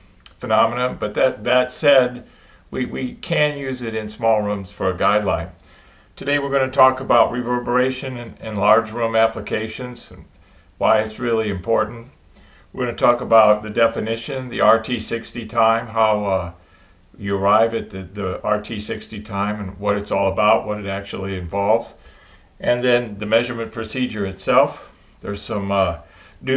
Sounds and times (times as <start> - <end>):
Speech: 0.3 - 5.6, 6.2 - 12.2, 12.8 - 16.6, 17.2 - 22.0, 22.6 - 26.5.